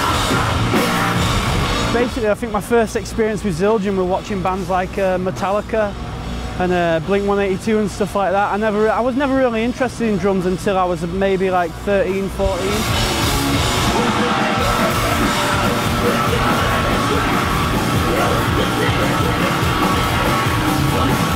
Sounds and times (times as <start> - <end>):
Music: 0.0 - 4.7, 5.5 - 21.3
Speech: 1.9 - 6.0, 6.6 - 12.8.